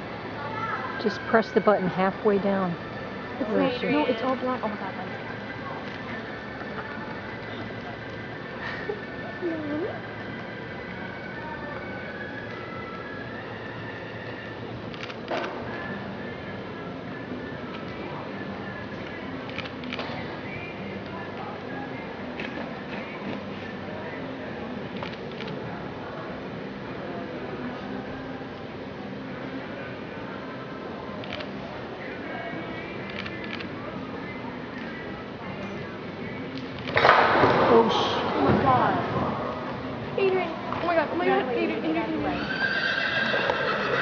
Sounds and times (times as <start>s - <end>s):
Music: 0.0s - 44.0s.